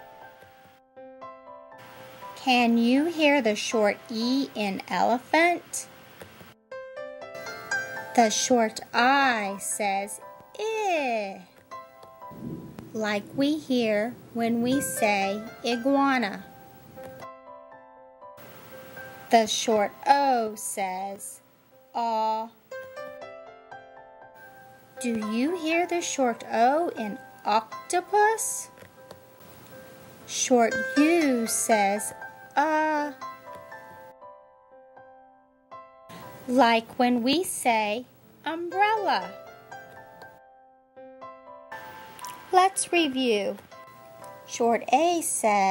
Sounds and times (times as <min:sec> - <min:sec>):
Music: 0:00.0 - 0:45.7
Speech: 0:02.4 - 0:05.9, 0:08.2 - 0:11.6, 0:13.0 - 0:16.5, 0:19.3 - 0:21.4, 0:22.0 - 0:22.6, 0:25.0 - 0:28.7, 0:30.3 - 0:33.2, 0:36.5 - 0:39.4, 0:42.5 - 0:43.6, 0:44.5 - 0:45.7.